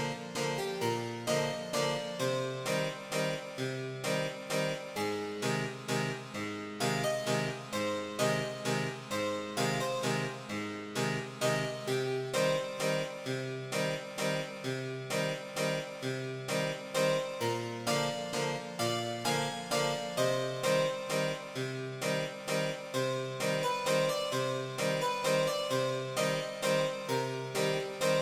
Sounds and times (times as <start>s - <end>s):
Harpsichord: 0.0s - 28.2s.